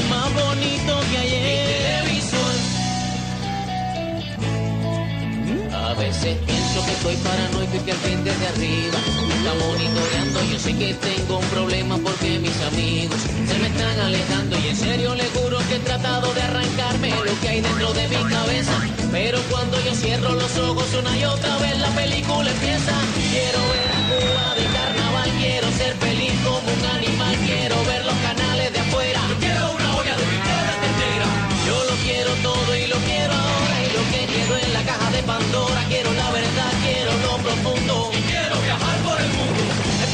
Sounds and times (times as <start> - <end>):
Music: 0.0 - 40.1.